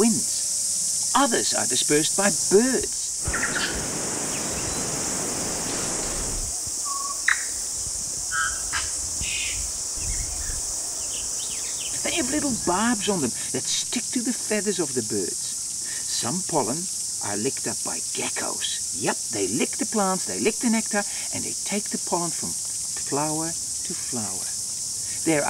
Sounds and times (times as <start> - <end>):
Cricket: 0.0 - 25.4.